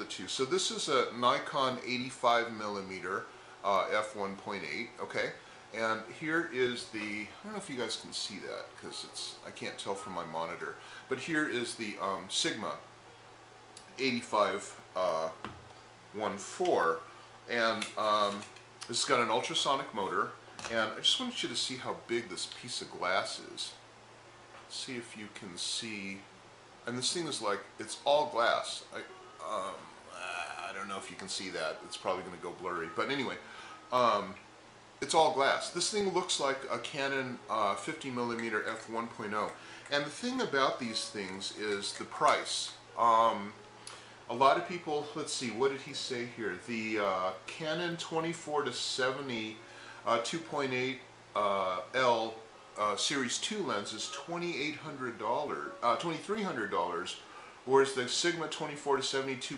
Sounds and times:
Speech: 0.0s - 12.9s, 13.9s - 15.5s, 16.2s - 23.8s, 24.7s - 34.4s, 35.0s - 43.6s, 44.3s - 59.5s.

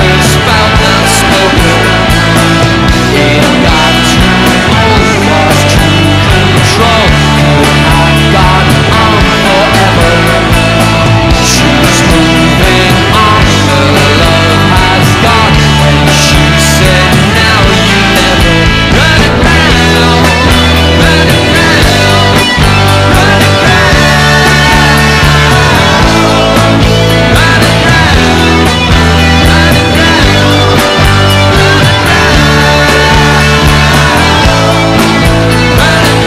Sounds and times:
Rock music: 0.0s - 36.2s
Singing: 0.0s - 36.2s.

